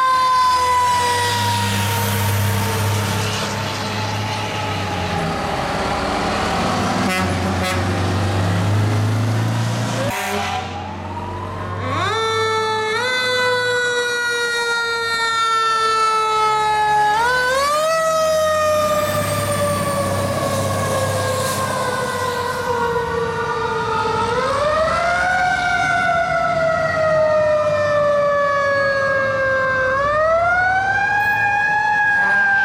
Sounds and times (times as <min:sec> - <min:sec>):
Fire engine, fire truck (siren): 0:00.0 - 0:32.6.